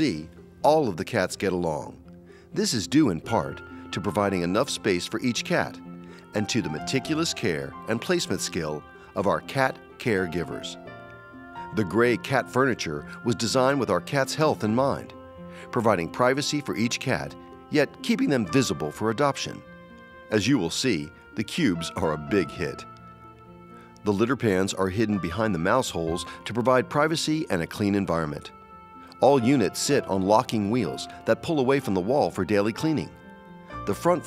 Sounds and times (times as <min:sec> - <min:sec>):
Speech: 0:00.0 - 0:02.0, 0:02.6 - 0:10.8, 0:11.7 - 0:15.1, 0:15.7 - 0:19.6, 0:20.3 - 0:22.9, 0:24.1 - 0:28.5, 0:29.2 - 0:33.2, 0:33.9 - 0:34.2
Music: 0:00.0 - 0:34.2.